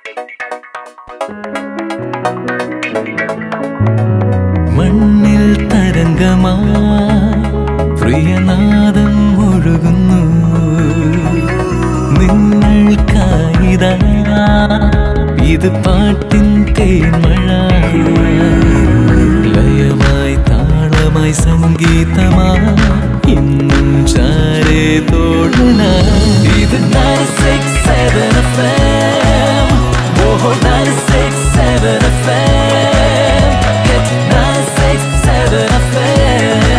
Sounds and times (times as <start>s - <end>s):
Music: 0.0s - 36.7s.